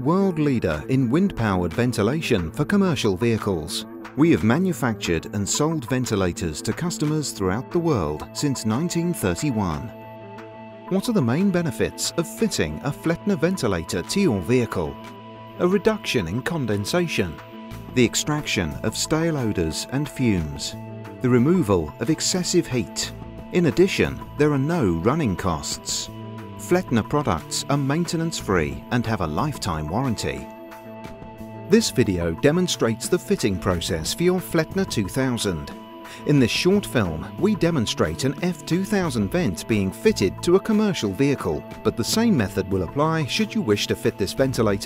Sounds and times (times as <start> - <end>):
Speech: 0.0 - 9.9, 10.9 - 17.4, 18.0 - 30.5, 31.7 - 44.8
Music: 0.0 - 44.8.